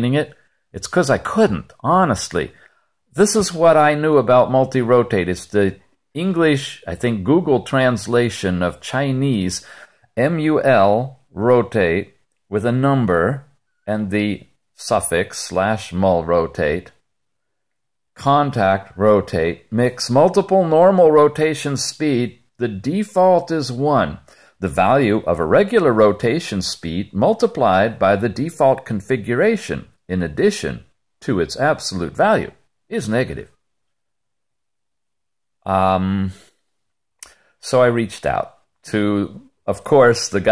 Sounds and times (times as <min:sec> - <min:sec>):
Speech: 0:00.0 - 0:17.0, 0:18.2 - 0:33.6, 0:35.6 - 0:36.6, 0:37.6 - 0:40.5.